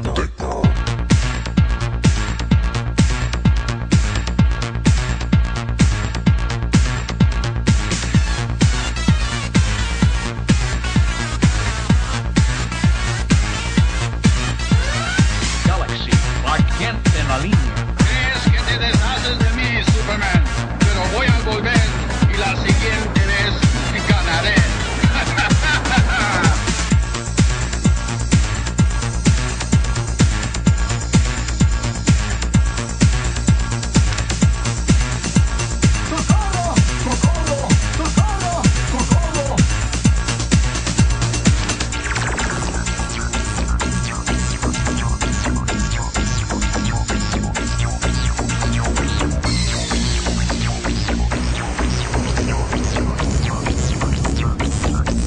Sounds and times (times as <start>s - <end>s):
Techno: 0.0s - 55.2s
Trance music: 0.0s - 55.2s.